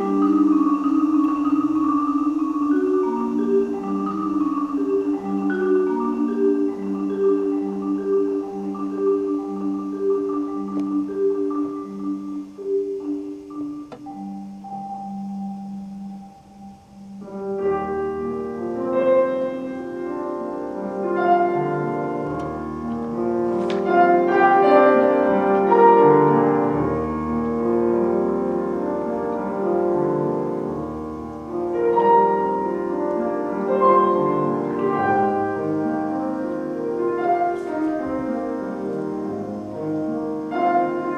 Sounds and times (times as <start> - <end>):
Marimba, xylophone: 0.0 - 41.1.